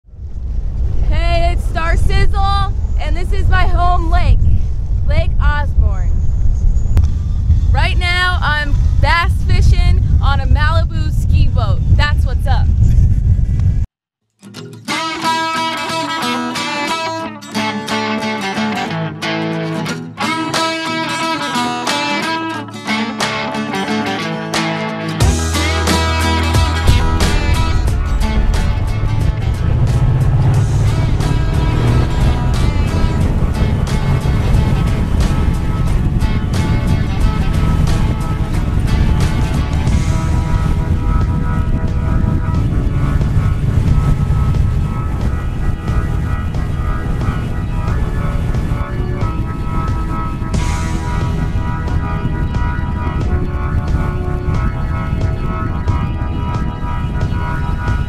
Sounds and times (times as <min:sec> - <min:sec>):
Outside, rural or natural: 0:00.0 - 0:58.0
Speech: 0:01.1 - 0:04.4, 0:05.1 - 0:06.1, 0:07.7 - 0:12.7.